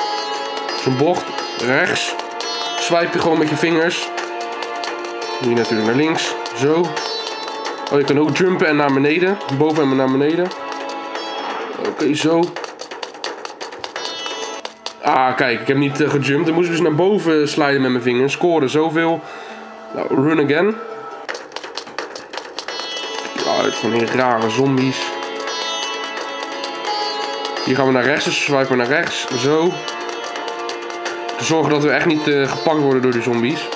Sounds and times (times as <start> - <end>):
Music: 0.0 - 33.7
Speech: 0.8 - 2.2, 2.8 - 4.1, 5.4 - 7.0, 7.9 - 10.5, 11.8 - 12.6, 15.0 - 19.2, 19.9 - 20.8, 23.3 - 25.2, 27.7 - 29.8, 31.4 - 33.7
Run: 9.4 - 11.3, 12.4 - 15.1, 21.2 - 23.4.